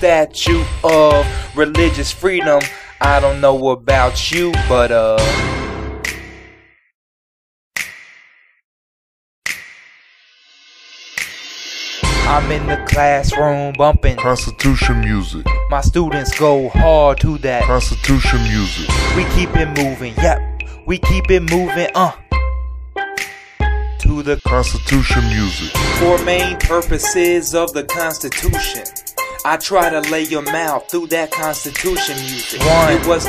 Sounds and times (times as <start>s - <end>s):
Rapping: 0.0s - 5.3s, 12.3s - 22.2s, 24.0s - 28.9s, 29.5s - 33.2s
Music: 0.0s - 6.8s, 9.5s - 33.2s.